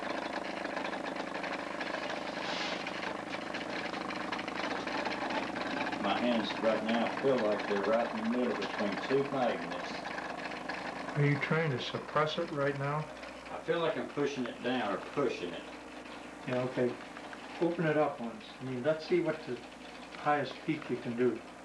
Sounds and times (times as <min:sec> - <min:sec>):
Speech: 0:06.0 - 0:10.0, 0:11.2 - 0:15.7, 0:16.4 - 0:17.0, 0:17.6 - 0:19.6, 0:20.2 - 0:21.4.